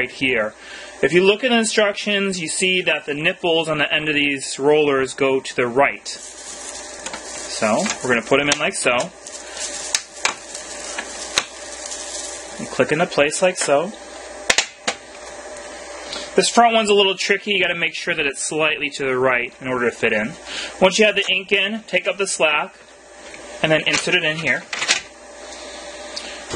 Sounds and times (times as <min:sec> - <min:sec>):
Speech: 0:00.0 - 0:06.2, 0:07.5 - 0:09.2, 0:12.6 - 0:14.0, 0:16.4 - 0:22.8, 0:23.6 - 0:24.7.